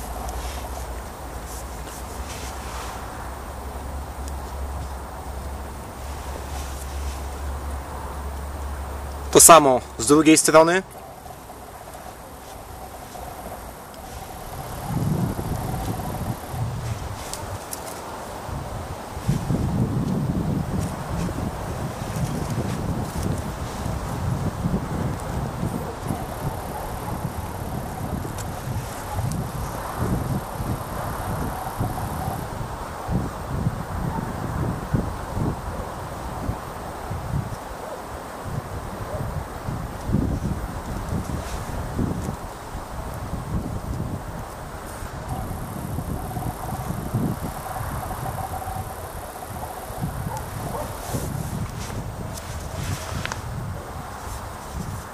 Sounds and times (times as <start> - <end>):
Rustling leaves: 0.0 - 55.1.